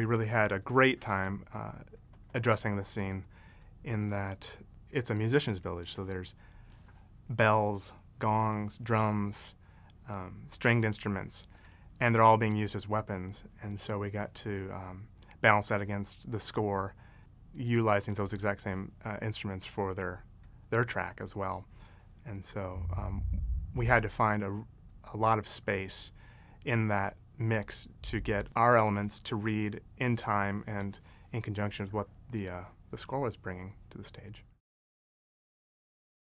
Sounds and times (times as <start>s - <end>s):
Speech: 0.0s - 6.4s, 7.3s - 17.0s, 17.6s - 34.6s.